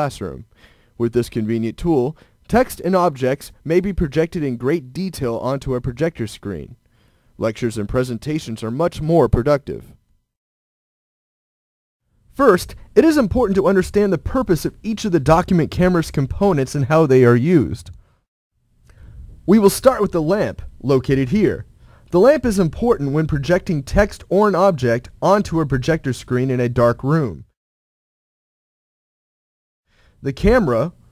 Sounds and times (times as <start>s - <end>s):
Speech: 0.0s - 6.8s, 7.4s - 10.0s, 12.4s - 18.0s, 19.5s - 27.6s, 30.2s - 31.0s.